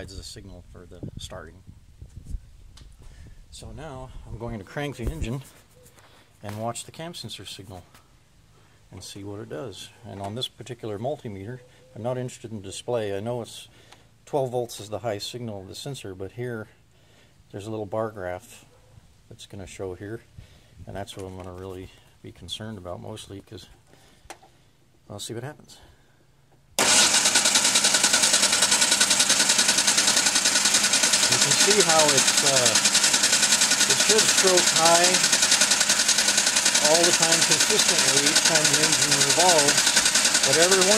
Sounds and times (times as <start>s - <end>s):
Speech: 0.0s - 1.7s, 3.5s - 5.5s, 6.4s - 7.9s, 8.9s - 13.7s, 14.3s - 16.8s, 17.5s - 18.7s, 19.3s - 20.3s, 20.9s - 23.8s, 25.1s - 25.9s, 31.3s - 32.8s, 33.9s - 35.3s, 36.8s - 40.9s
Vehicle: 25.7s - 40.9s.